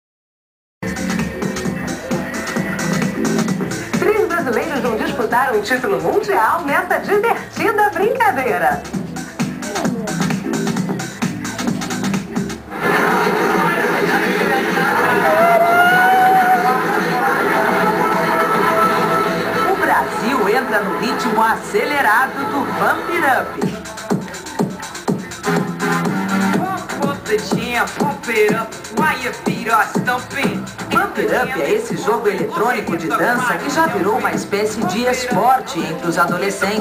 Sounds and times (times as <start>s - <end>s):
Music: 0.8s - 36.8s
Speech: 4.0s - 8.8s, 9.6s - 10.3s, 19.7s - 25.0s, 26.6s - 36.8s.